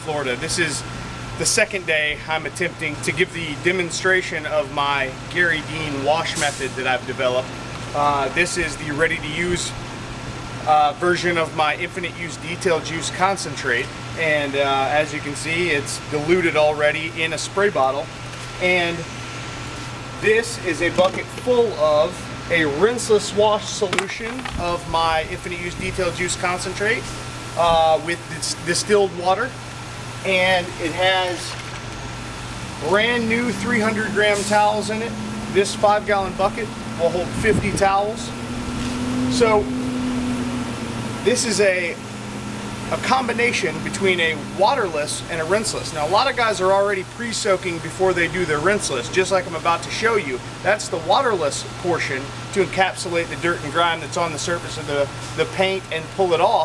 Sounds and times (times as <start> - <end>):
Speech: 0.0 - 9.8, 10.6 - 19.1, 20.2 - 29.6, 30.2 - 31.6, 32.8 - 38.3, 39.3 - 39.7, 41.2 - 42.0, 42.9 - 56.6.